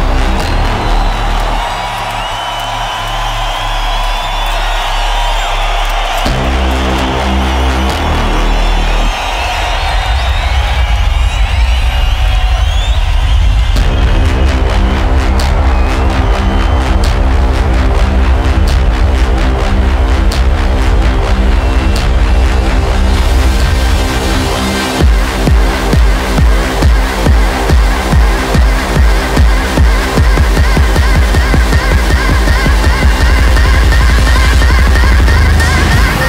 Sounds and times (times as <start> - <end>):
Electronic dance music: 0.0 - 36.2.